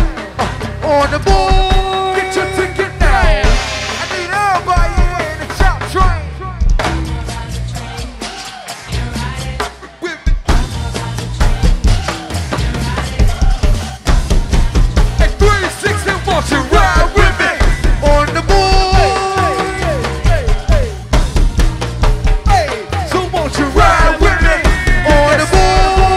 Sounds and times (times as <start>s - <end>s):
Music: 0.0s - 26.1s.